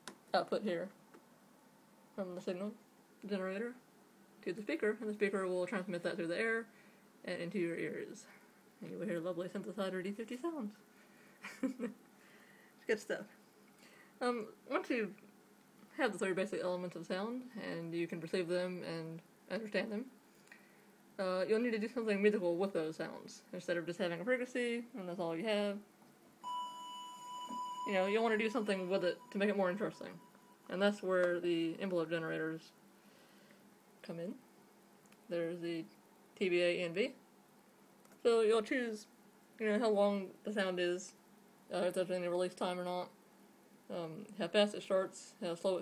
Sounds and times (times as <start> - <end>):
Speech: 0.3 - 1.0, 2.2 - 3.8, 4.4 - 10.8, 12.9 - 13.4, 14.2 - 15.2, 15.9 - 20.1, 21.2 - 25.9, 27.9 - 32.8, 34.0 - 34.4, 35.3 - 37.2, 38.2 - 43.2, 43.9 - 45.8.